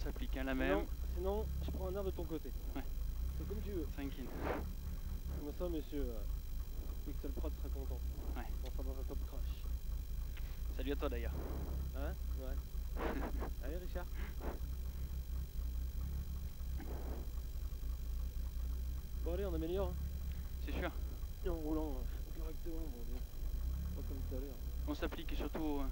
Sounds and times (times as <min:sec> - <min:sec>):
Speech: 0:00.0 - 0:04.6, 0:05.3 - 0:06.3, 0:07.0 - 0:09.7, 0:10.7 - 0:14.3, 0:19.2 - 0:20.0, 0:20.6 - 0:23.2, 0:23.9 - 0:25.9.